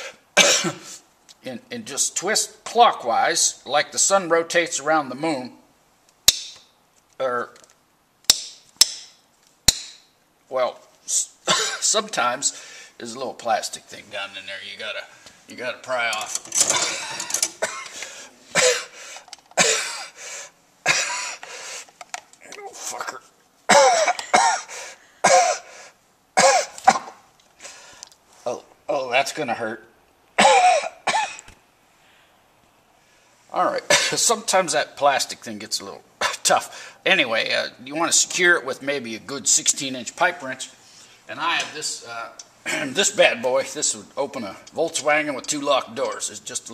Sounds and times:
Cough: 0.4 - 1.0, 11.5 - 11.9, 16.9 - 18.0, 18.6 - 18.9, 19.6 - 20.2, 20.9 - 21.4, 23.7 - 25.7, 26.4 - 27.2, 30.4 - 31.5, 33.9 - 34.2
Speech: 1.4 - 5.7, 7.2 - 7.6, 10.5 - 16.4, 22.4 - 23.4, 28.4 - 30.0, 33.5 - 46.7.

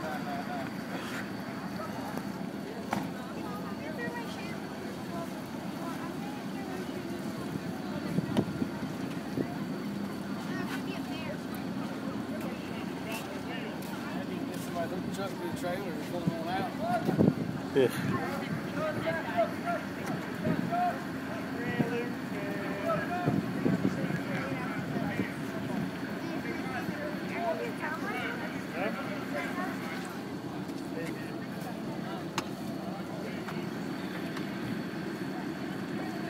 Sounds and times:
Speech: 0.0 - 36.3
Vehicle: 0.0 - 36.3.

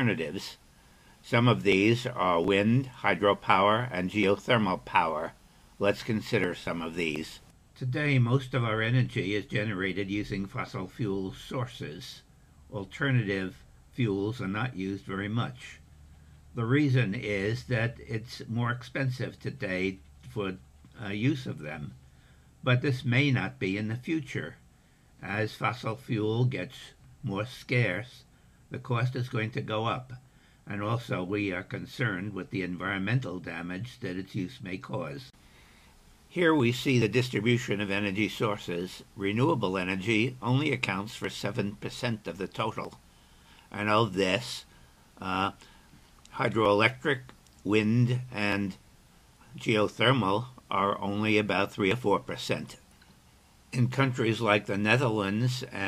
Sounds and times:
Speech: 0.0 - 0.6, 1.2 - 15.8, 16.5 - 22.0, 22.6 - 24.6, 25.2 - 35.4, 36.3 - 43.0, 43.7 - 45.7, 46.3 - 48.8, 49.5 - 52.9, 53.7 - 55.8.

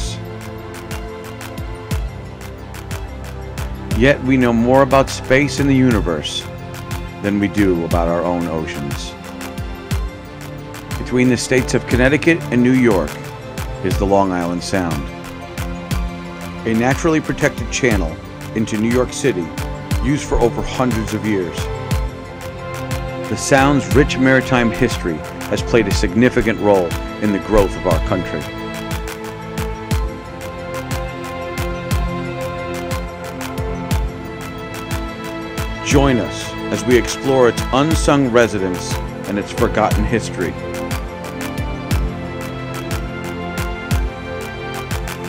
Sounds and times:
Music: 0.0 - 45.2
Speech: 3.9 - 6.5, 7.2 - 9.2, 11.0 - 13.2, 13.8 - 15.1, 16.6 - 21.7, 23.3 - 28.5, 35.8 - 40.6.

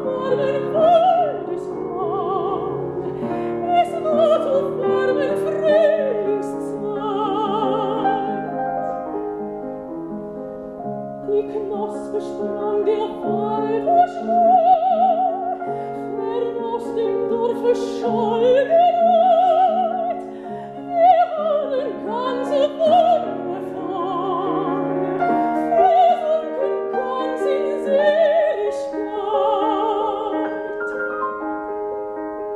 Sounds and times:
Piano: 0.0 - 32.5.

